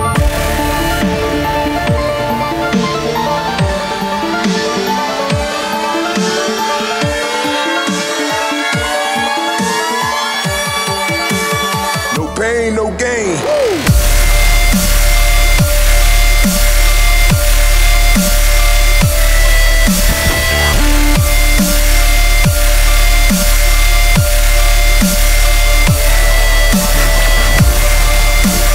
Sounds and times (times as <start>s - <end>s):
Music: 0.0s - 28.7s.